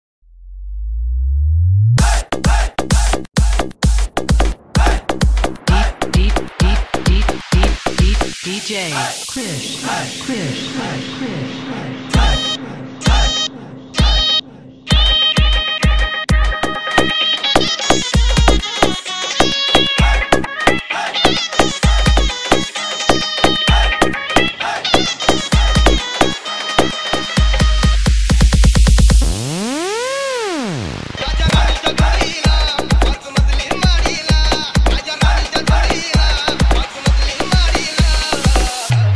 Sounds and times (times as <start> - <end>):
Music: 1.1 - 39.1.